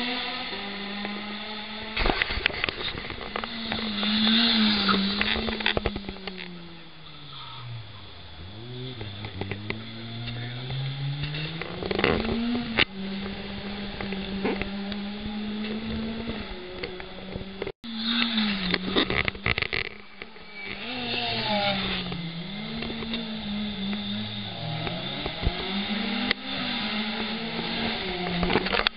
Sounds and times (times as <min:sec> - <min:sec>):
Race car, auto racing: 0:00.0 - 0:28.9.